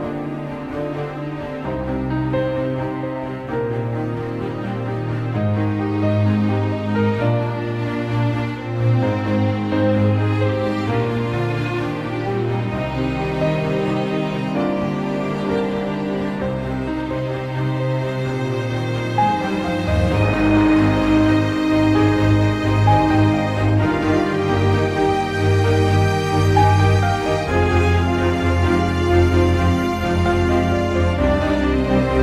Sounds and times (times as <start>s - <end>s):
Music: 0.0s - 32.2s.